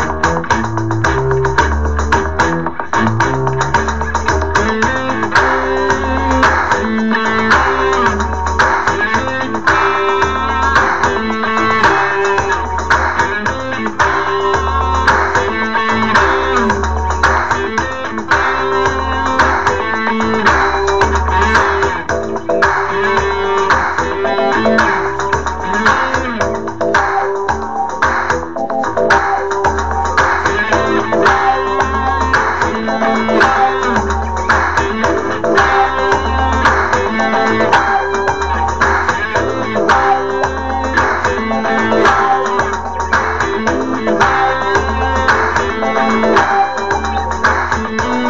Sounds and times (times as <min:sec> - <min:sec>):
Electric guitar: 0:00.0 - 0:48.2.